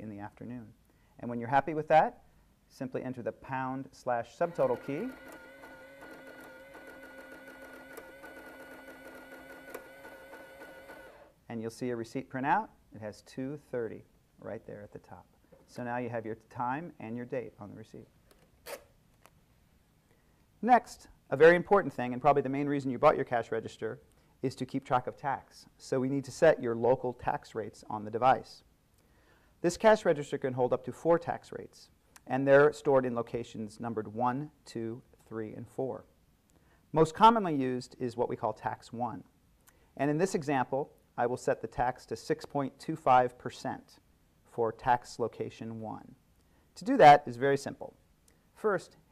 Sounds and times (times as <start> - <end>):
Speech: 0.0 - 5.2, 11.5 - 18.1, 20.6 - 28.7, 29.6 - 36.1, 36.9 - 39.3, 40.0 - 46.2, 46.8 - 48.0, 48.6 - 49.0.